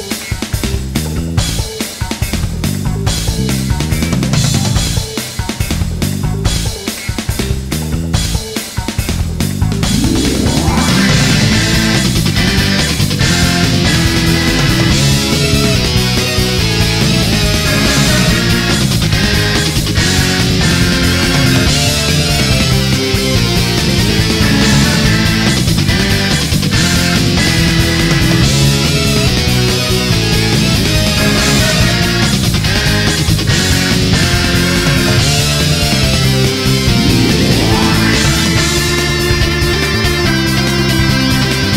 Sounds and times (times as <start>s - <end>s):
Music: 0.0s - 41.7s.